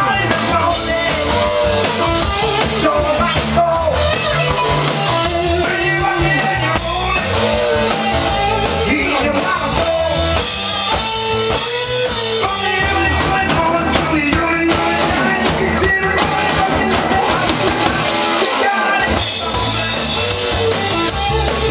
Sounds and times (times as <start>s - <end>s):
Punk rock: 0.0s - 21.7s
Rock and roll: 0.0s - 21.7s.